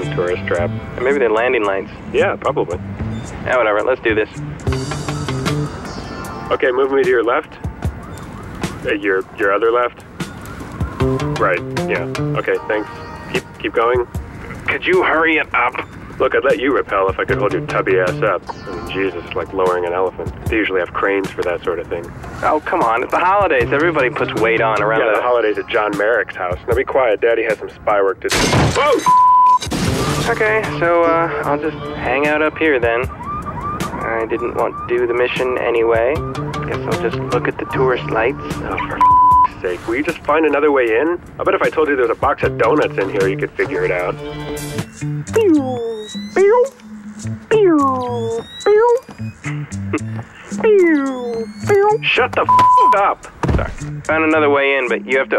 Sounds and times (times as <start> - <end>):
Speech: 0.0 - 2.8, 3.5 - 4.4, 6.5 - 7.6, 8.8 - 10.0, 11.4 - 29.0, 30.3 - 33.1, 34.0 - 44.2, 45.3 - 46.8, 47.5 - 49.1, 50.6 - 55.3
Music: 0.0 - 55.3.